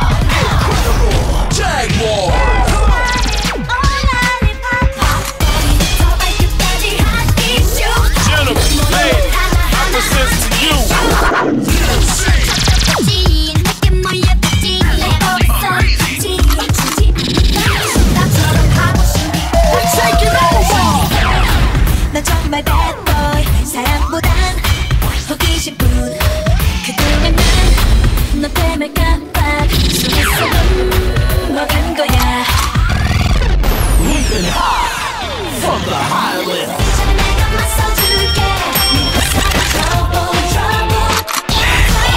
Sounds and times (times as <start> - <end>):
Music: 0.0 - 42.1.